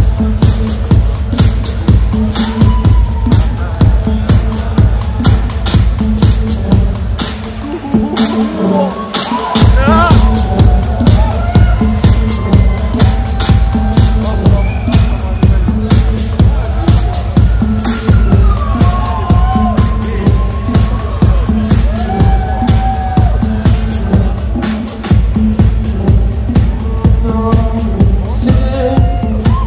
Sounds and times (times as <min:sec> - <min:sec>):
Electronic music: 0:00.0 - 0:29.6.